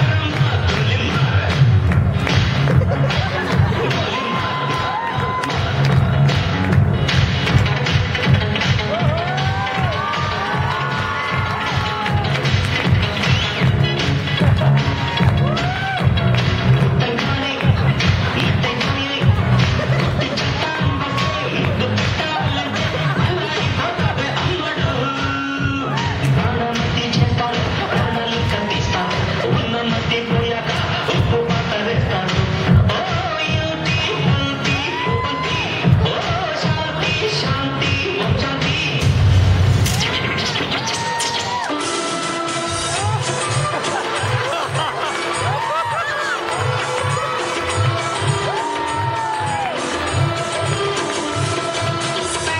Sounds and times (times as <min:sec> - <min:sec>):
Inside, large room or hall: 0:00.0 - 0:52.5
Music: 0:00.0 - 0:52.5.